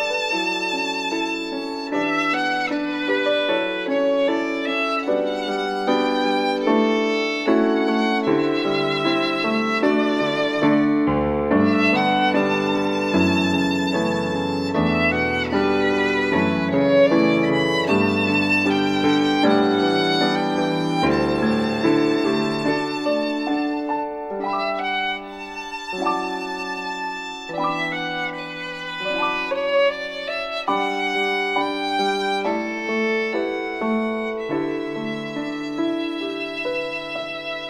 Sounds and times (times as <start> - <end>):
Music: 0.0 - 37.6.